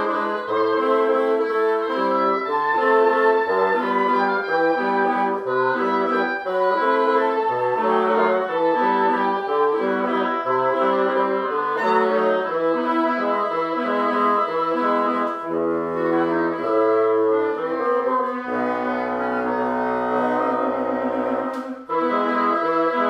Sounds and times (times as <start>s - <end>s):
Brass instrument: 0.0s - 23.1s
Saxophone: 0.0s - 23.1s.